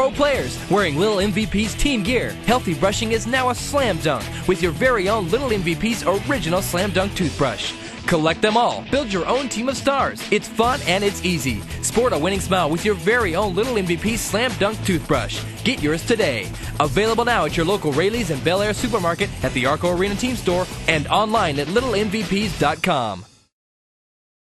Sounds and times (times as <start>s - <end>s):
Speech: 0.0s - 23.3s
Music: 0.0s - 23.6s.